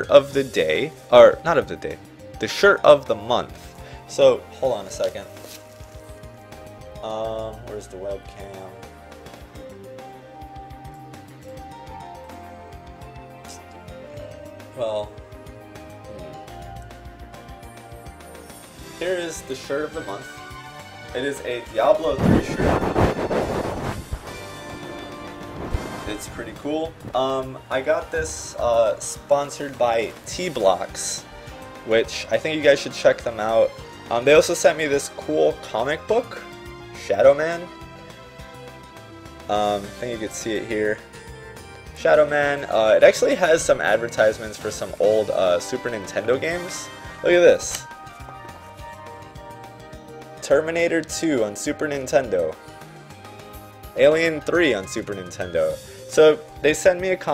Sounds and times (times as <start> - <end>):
Speech: 0.0 - 3.5, 4.1 - 5.3, 7.0 - 8.8, 14.8 - 15.1, 19.0 - 20.3, 21.1 - 22.8, 26.1 - 31.2, 31.9 - 36.4, 37.0 - 37.7, 39.5 - 41.0, 42.0 - 47.9, 50.4 - 52.6, 54.0 - 57.3
Music: 0.0 - 57.3.